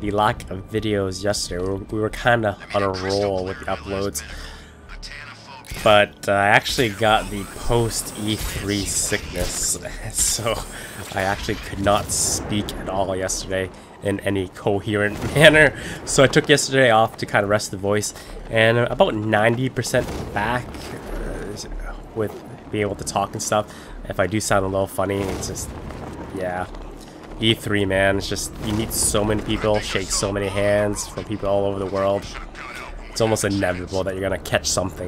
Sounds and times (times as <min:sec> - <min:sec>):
Speech: 0:00.0 - 0:25.7, 0:26.4 - 0:26.8, 0:27.4 - 0:35.0.